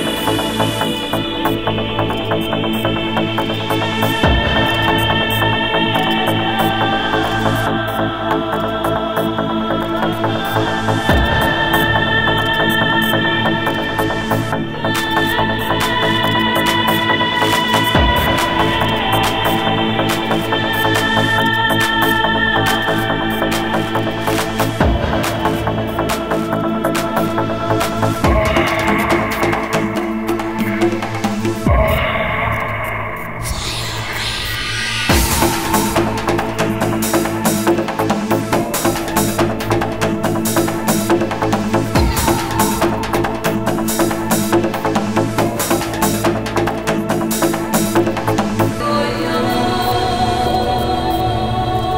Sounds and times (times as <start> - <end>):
Trance music: 0.0 - 51.9.